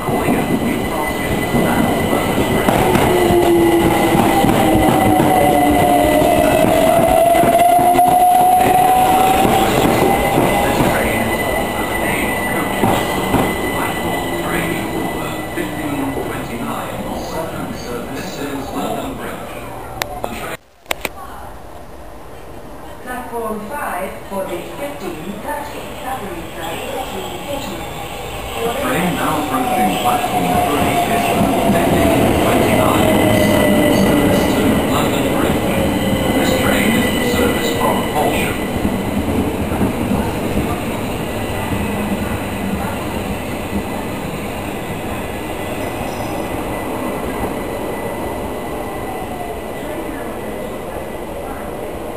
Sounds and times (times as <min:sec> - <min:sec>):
Railroad car, train wagon: 0:00.0 - 0:20.3, 0:21.9 - 0:52.1
Train: 0:00.0 - 0:20.6, 0:21.4 - 0:52.1.